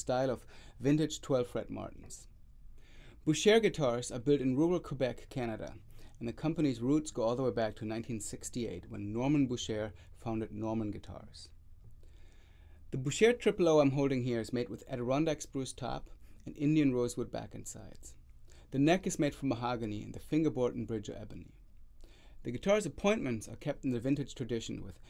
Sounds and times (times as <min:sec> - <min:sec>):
Speech: 0:00.0 - 0:02.4, 0:03.2 - 0:11.6, 0:12.9 - 0:21.6, 0:22.4 - 0:25.1.